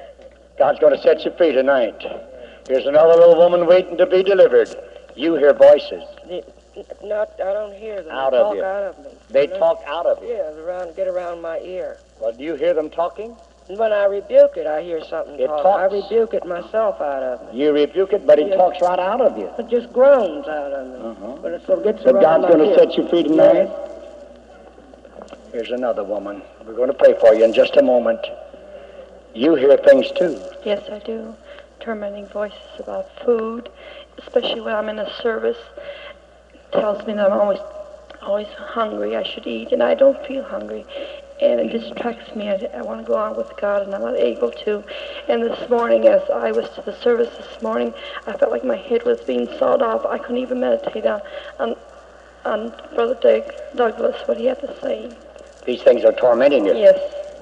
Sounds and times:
Speech: 0.6 - 23.8.

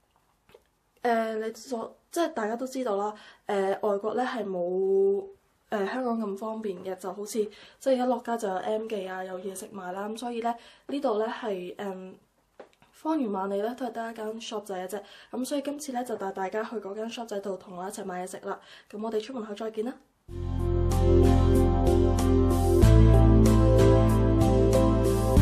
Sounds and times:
Speech: 1.0 - 12.2, 13.0 - 20.1.

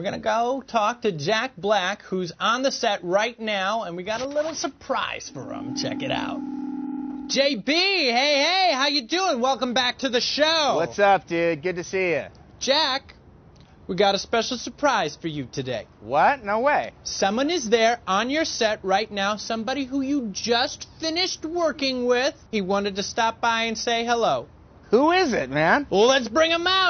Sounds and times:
Speech: 7.3 - 13.1.

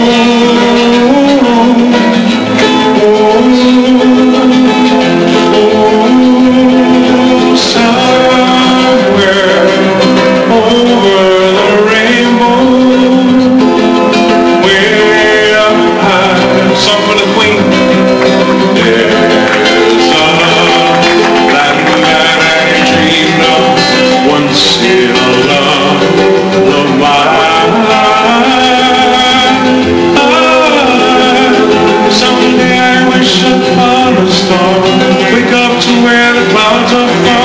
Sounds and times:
Acoustic guitar: 0.0 - 37.4
Strum: 0.0 - 37.4.

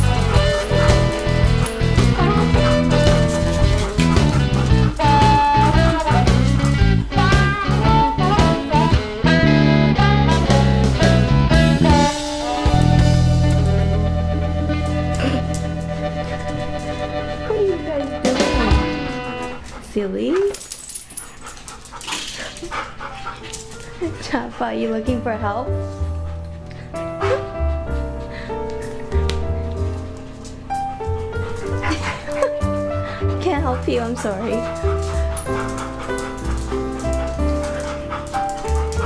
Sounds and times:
Dog: 0.0 - 6.3, 15.2 - 25.1, 26.1 - 28.3, 31.4 - 39.0
Music: 0.0 - 39.0
Speech: 19.9 - 20.6, 24.0 - 25.7, 33.4 - 34.6.

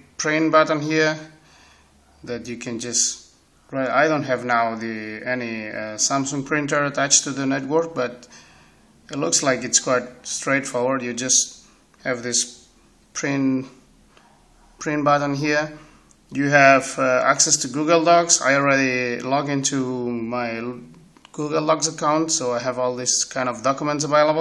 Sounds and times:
Speech: 0.0 - 1.4, 2.2 - 8.3, 9.1 - 13.8, 14.8 - 24.4.

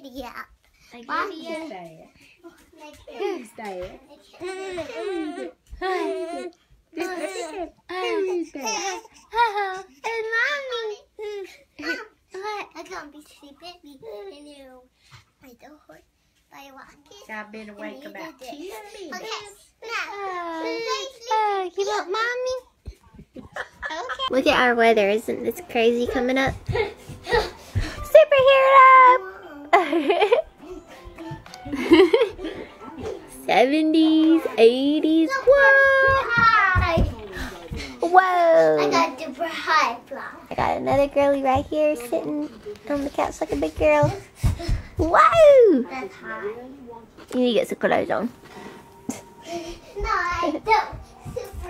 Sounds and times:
Child speech, kid speaking: 0.0 - 22.8, 33.0 - 47.0, 50.0 - 51.7
Laughter: 23.2 - 24.3, 29.7 - 30.6, 31.7 - 32.6
Music: 24.3 - 37.3, 47.4 - 51.7.

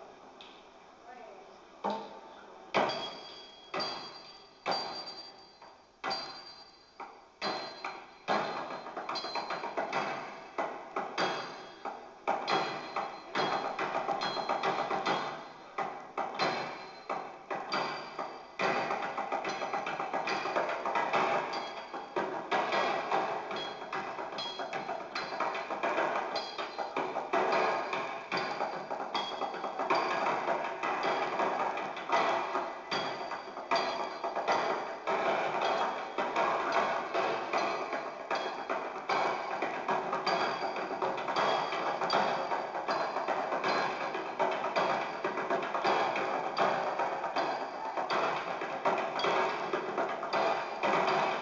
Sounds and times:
Flamenco: 7.1 - 51.4.

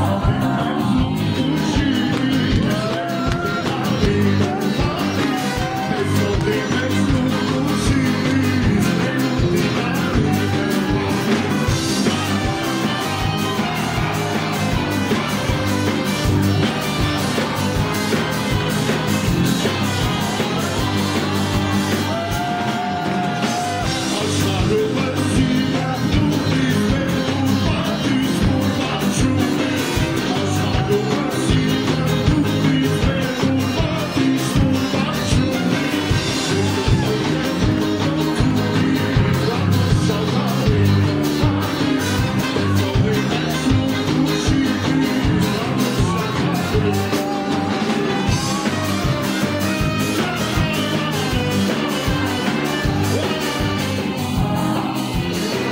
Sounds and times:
Music: 0.0 - 55.7
Singing: 0.0 - 55.7.

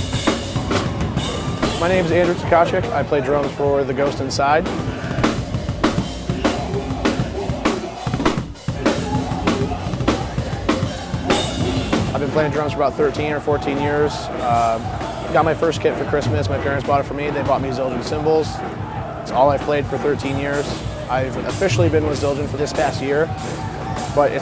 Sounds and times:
Music: 0.0 - 24.4
Speech: 1.8 - 4.7, 12.1 - 18.6, 19.3 - 23.3, 24.0 - 24.4.

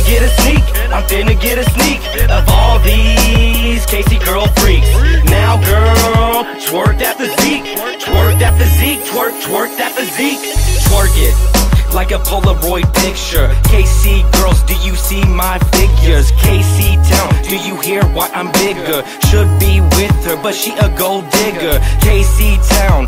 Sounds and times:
Blues: 0.0 - 23.0.

